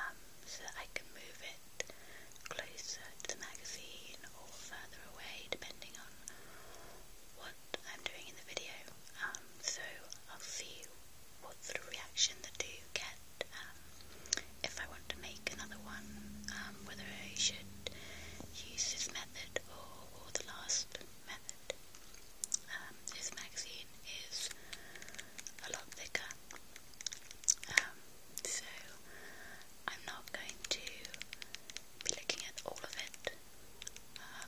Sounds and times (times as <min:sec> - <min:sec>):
Whispering: 0:00.0 - 0:01.6, 0:02.5 - 0:06.3, 0:07.4 - 0:13.8, 0:14.6 - 0:21.8, 0:22.6 - 0:24.6, 0:25.6 - 0:26.4, 0:27.6 - 0:29.0, 0:29.9 - 0:33.4, 0:34.2 - 0:34.4.